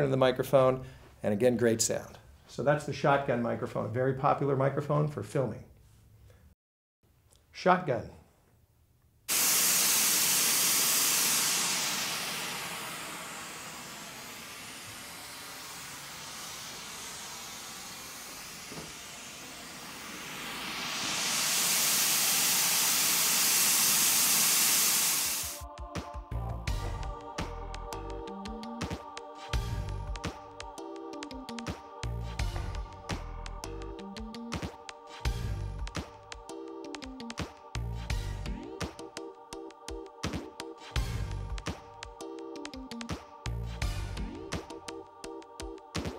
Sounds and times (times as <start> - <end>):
Steam: 9.3 - 25.6.